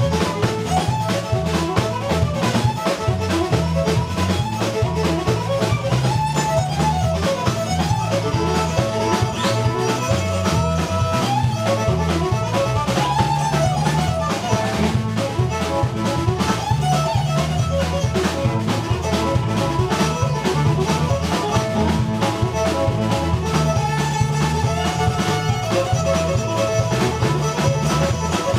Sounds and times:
Violin, fiddle: 0.0s - 28.5s.

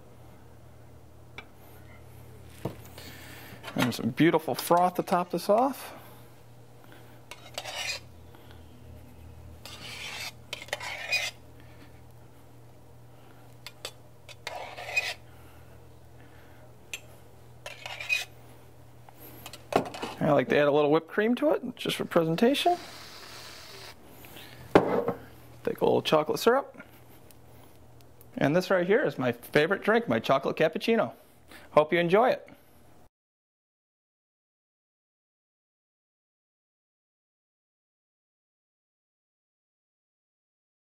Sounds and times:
Speech: 3.8s - 6.0s, 20.2s - 22.8s, 25.6s - 26.8s, 28.4s - 32.6s.

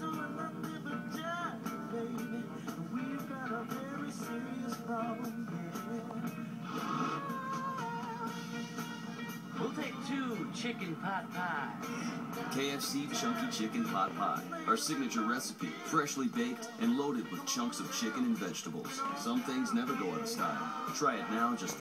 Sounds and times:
Music: 0.0s - 21.8s
Speech: 9.6s - 11.7s, 12.6s - 21.8s.

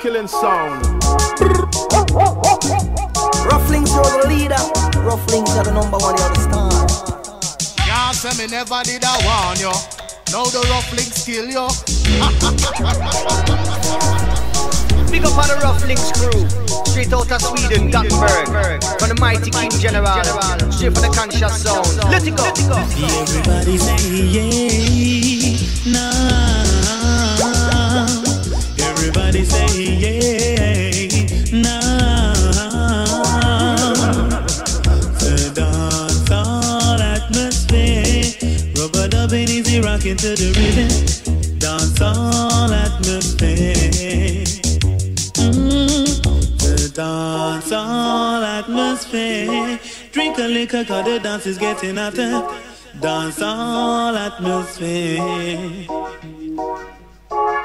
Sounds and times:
Music: 0.0s - 57.6s.

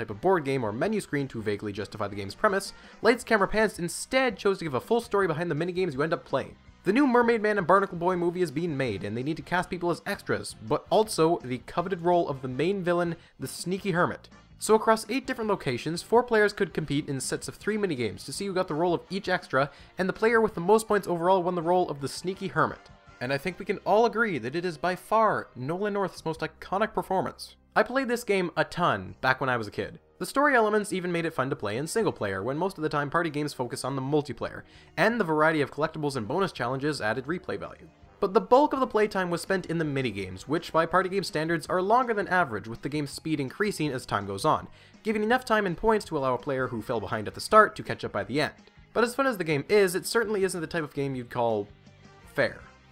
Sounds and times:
Speech: 0.0s - 51.7s, 52.3s - 52.7s
Music: 0.0s - 52.9s.

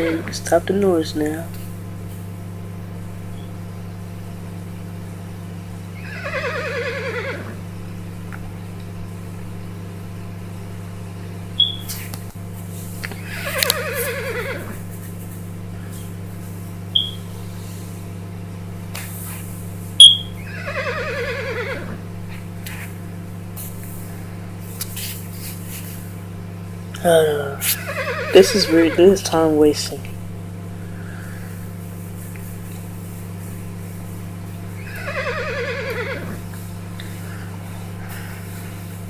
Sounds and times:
Speech: 0.0s - 1.6s, 27.0s - 30.2s.

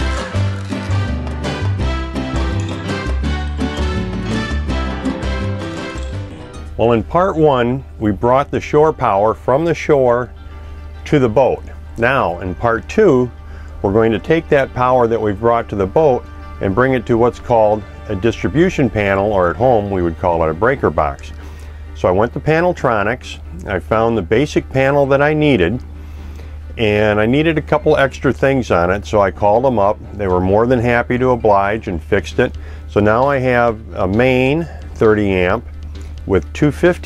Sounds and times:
Music: 0.0s - 37.0s
Speech: 6.8s - 10.3s, 11.0s - 21.4s, 22.0s - 25.8s, 26.8s - 35.6s, 36.3s - 37.0s.

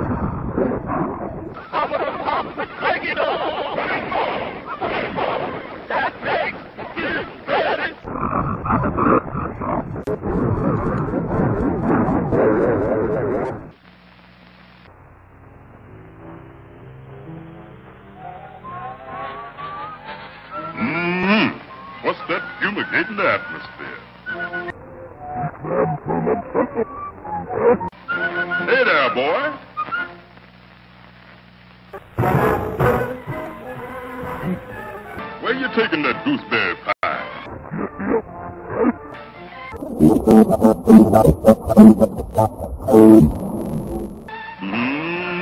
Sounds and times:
Speech: 1.6s - 4.9s, 21.0s - 24.0s, 28.7s - 29.6s, 35.4s - 37.3s, 39.8s - 43.3s
Music: 21.4s - 24.9s, 27.0s - 31.0s, 31.9s - 42.1s, 44.1s - 45.4s.

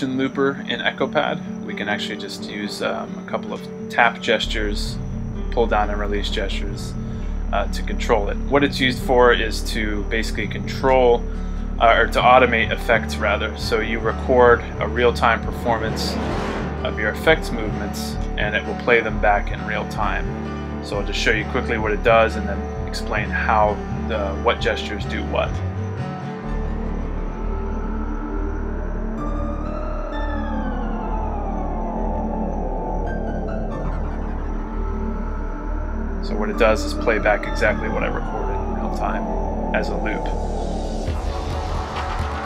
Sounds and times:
Speech: 0.0s - 5.0s, 5.6s - 16.2s, 16.9s - 20.3s, 20.9s - 25.6s, 36.2s - 40.4s
Music: 0.0s - 42.4s.

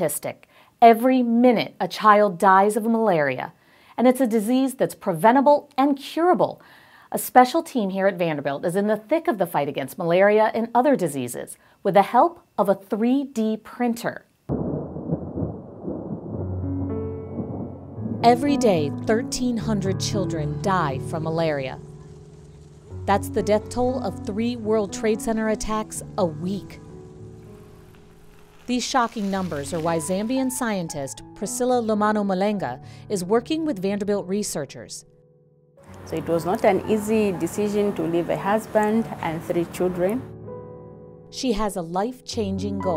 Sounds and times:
Speech: 0.0s - 14.3s, 18.3s - 21.8s, 23.1s - 26.8s, 28.7s - 35.0s, 36.1s - 40.3s, 41.4s - 42.9s.

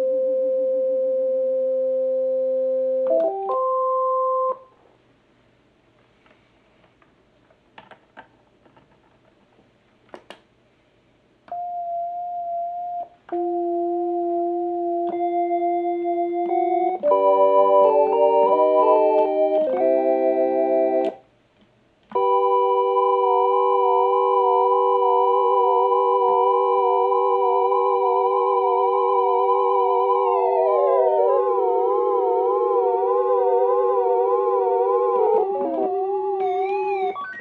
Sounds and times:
Synthesizer: 22.1s - 37.4s.

